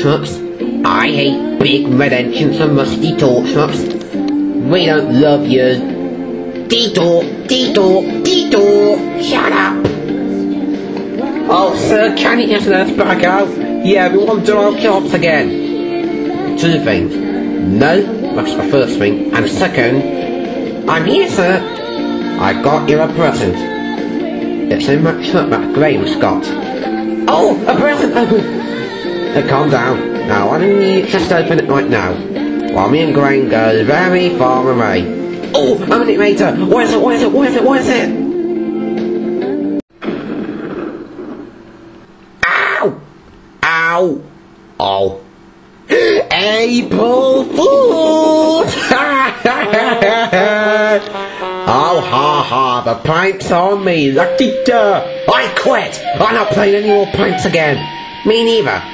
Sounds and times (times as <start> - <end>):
Speech: 0.0 - 3.9, 6.7 - 9.9, 11.5 - 15.5, 16.6 - 20.1, 24.7 - 26.6, 29.4 - 32.2, 32.8 - 38.2, 46.3 - 48.8, 51.7 - 58.9
Music: 0.0 - 40.8, 45.9 - 58.9
Television: 0.0 - 58.9.